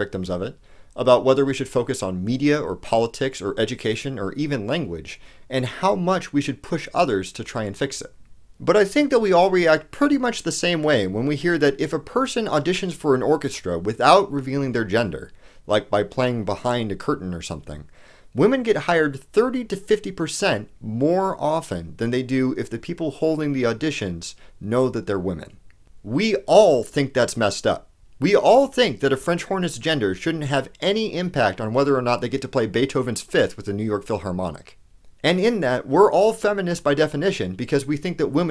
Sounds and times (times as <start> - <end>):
Narration, monologue: 0.0 - 38.5.